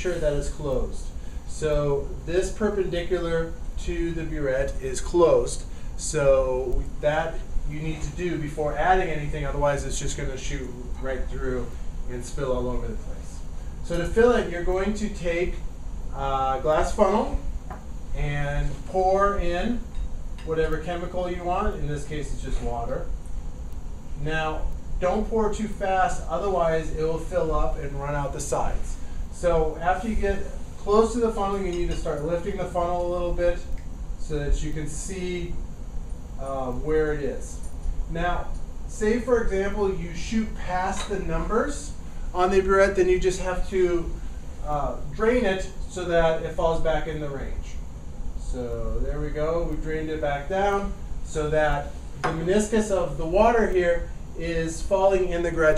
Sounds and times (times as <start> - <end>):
Speech: 0.0 - 17.5, 18.1 - 23.1, 24.2 - 35.6, 36.4 - 47.8, 48.4 - 55.7.